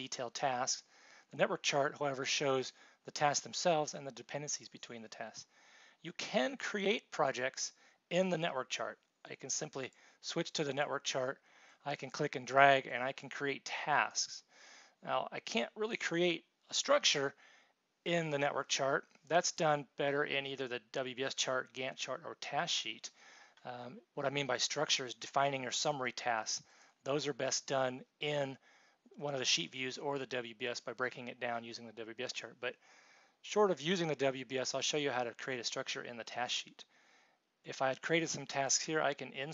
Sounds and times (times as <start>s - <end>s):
Speech: 0.0s - 17.4s, 18.1s - 28.6s, 29.2s - 32.8s, 33.5s - 36.9s, 37.7s - 39.5s.